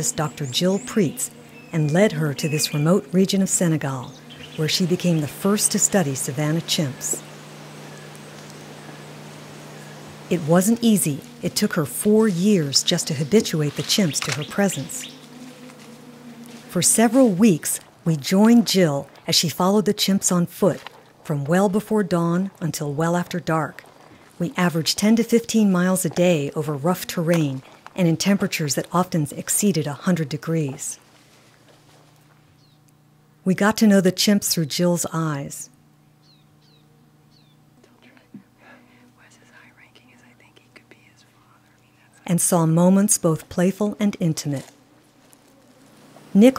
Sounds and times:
Speech: 0:00.0 - 0:07.2, 0:10.3 - 0:15.1, 0:16.7 - 0:23.8, 0:24.4 - 0:31.0, 0:33.5 - 0:35.7, 0:42.2 - 0:44.7, 0:46.4 - 0:46.5
Whispering: 0:37.8 - 0:42.4.

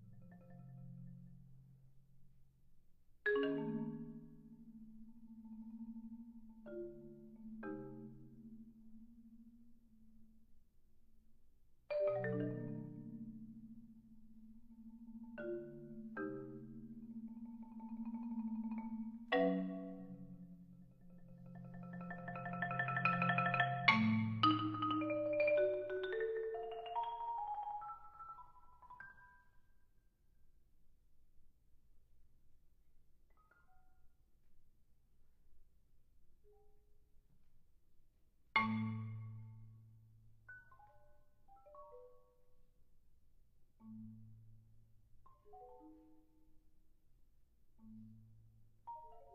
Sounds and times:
Marimba, xylophone: 0:00.0 - 0:01.6, 0:03.3 - 0:09.4, 0:11.9 - 0:29.7, 0:38.6 - 0:42.6, 0:43.8 - 0:46.6, 0:47.8 - 0:49.3.

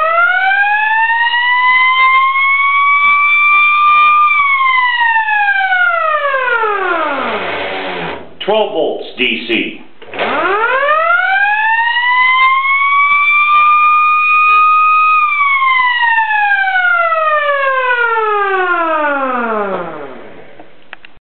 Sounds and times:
Police car (siren): 0:00.0 - 0:08.1, 0:10.3 - 0:20.4.

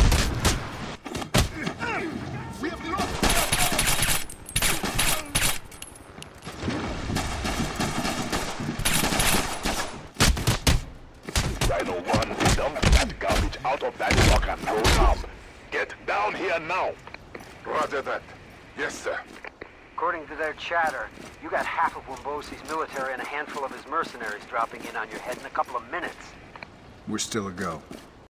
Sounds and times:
Speech: 0:20.0 - 0:26.3, 0:27.1 - 0:27.8.

